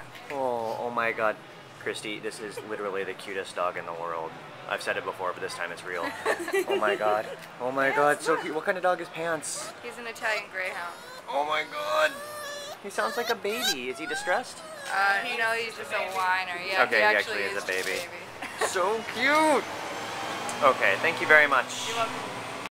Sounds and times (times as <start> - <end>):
Whimper (dog): 10.7 - 16.3
Yip: 11.0 - 15.3.